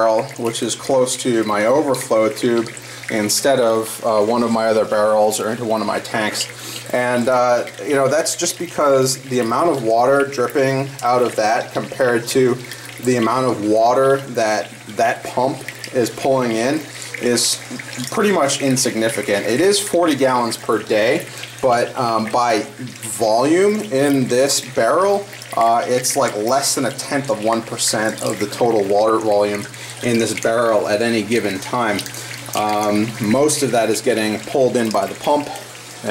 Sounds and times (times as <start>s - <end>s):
Speech: 0.0s - 36.1s.